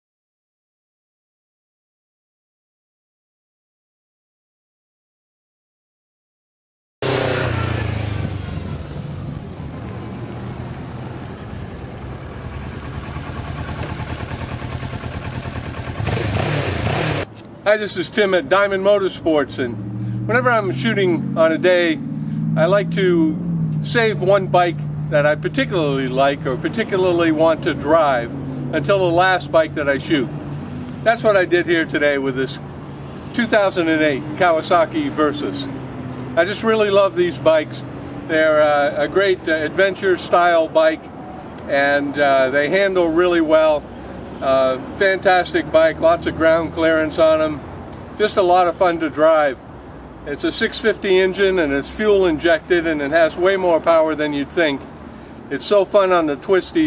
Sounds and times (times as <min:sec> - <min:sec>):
Speech: 0:17.7 - 0:22.0, 0:22.6 - 0:30.3, 0:31.0 - 0:32.6, 0:33.3 - 0:35.7, 0:36.4 - 0:41.1, 0:41.7 - 0:43.8, 0:44.4 - 0:47.6, 0:48.2 - 0:49.6, 0:50.3 - 0:54.9, 0:55.5 - 0:56.8.